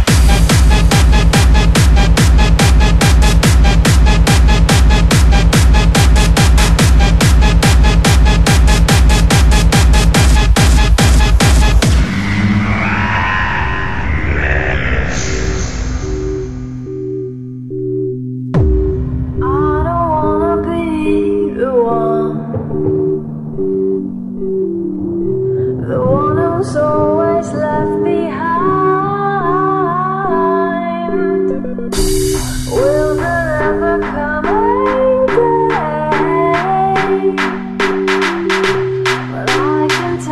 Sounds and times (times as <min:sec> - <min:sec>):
Music: 0:00.0 - 0:40.3.